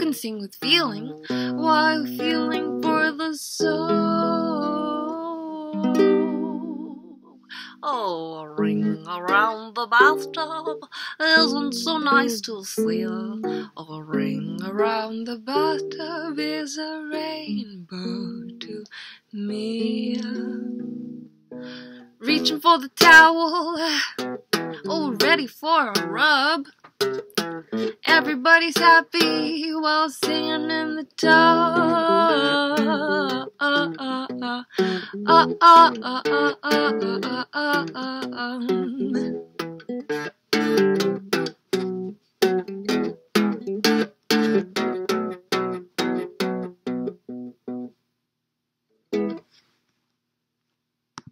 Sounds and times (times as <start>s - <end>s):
Guitar: 0.0s - 18.8s, 19.4s - 48.0s, 49.1s - 49.7s
Ukulele: 0.0s - 18.8s, 19.4s - 48.0s, 49.1s - 49.6s.